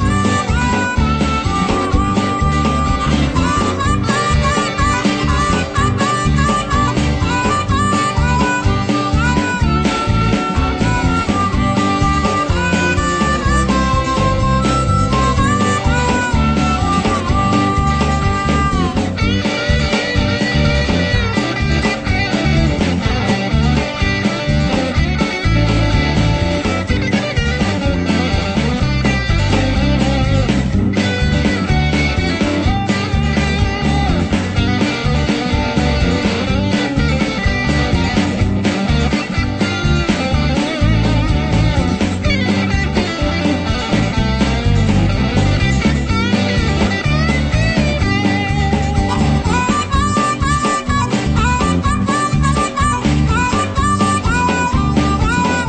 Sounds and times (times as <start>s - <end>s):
Dance music: 0.0s - 55.6s.